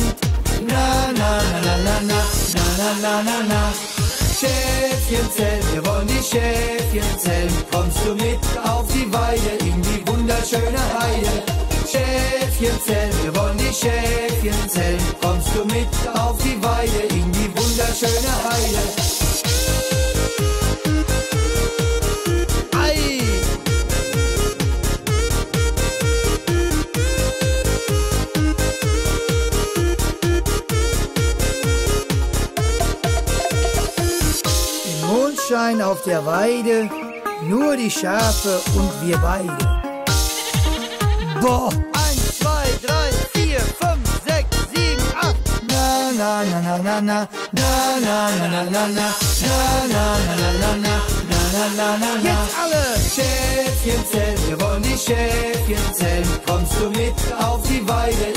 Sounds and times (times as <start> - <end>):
Music: 0.0 - 58.3.